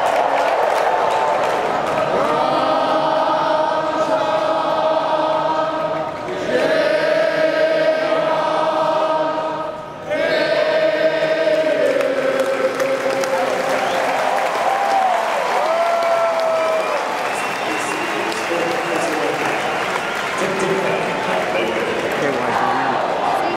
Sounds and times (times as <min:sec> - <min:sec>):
Speech: 0:20.4 - 0:23.5.